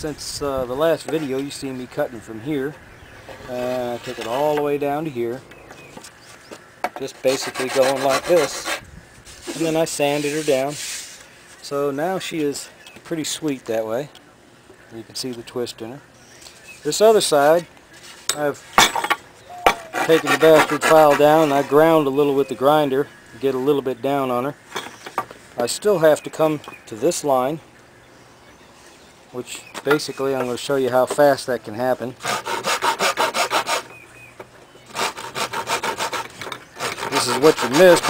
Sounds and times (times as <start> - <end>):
Speech: 0.0 - 2.8, 3.4 - 5.4, 7.0 - 8.7, 9.5 - 10.8, 11.6 - 14.2, 14.9 - 16.0, 16.8 - 17.7, 18.3 - 18.6, 20.0 - 24.6, 25.6 - 27.6, 29.3 - 32.2, 37.1 - 38.0.